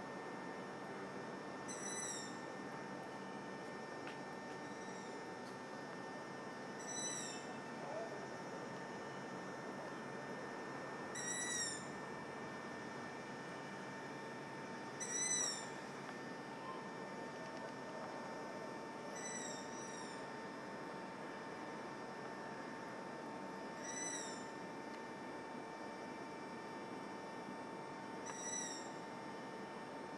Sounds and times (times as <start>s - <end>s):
Bird: 1.7s - 2.4s, 6.8s - 8.1s, 11.2s - 11.9s, 15.0s - 15.7s, 19.1s - 20.2s, 23.8s - 24.5s, 28.2s - 29.0s.